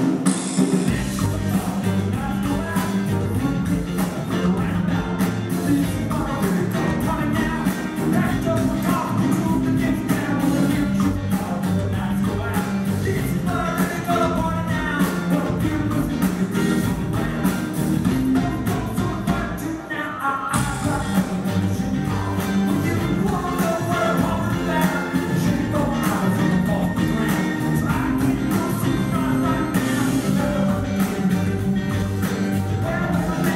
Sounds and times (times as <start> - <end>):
Music: 0.0 - 33.5.